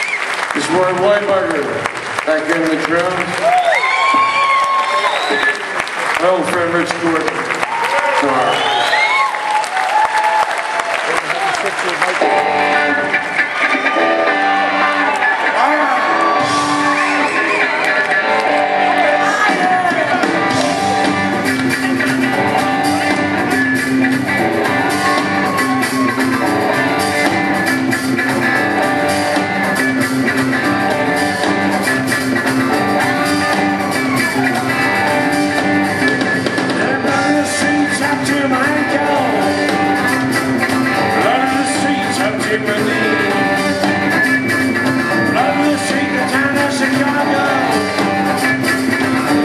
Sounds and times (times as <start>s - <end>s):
Music: 0.0s - 49.4s.